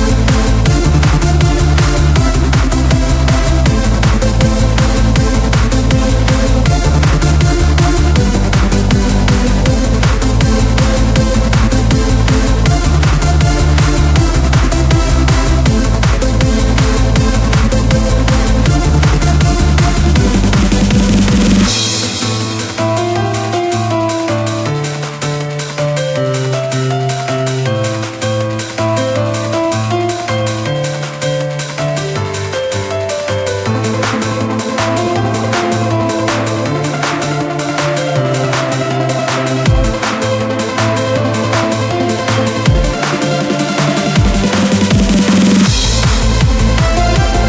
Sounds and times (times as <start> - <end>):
Techno: 0.0 - 47.4.